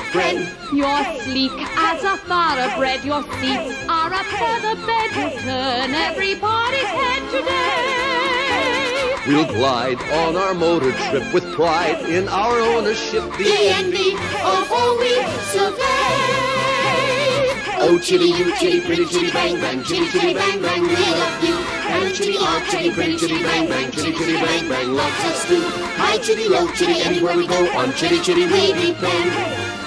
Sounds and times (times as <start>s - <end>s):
Music: 0.0s - 29.8s
Speech: 0.1s - 5.4s, 9.3s - 13.1s.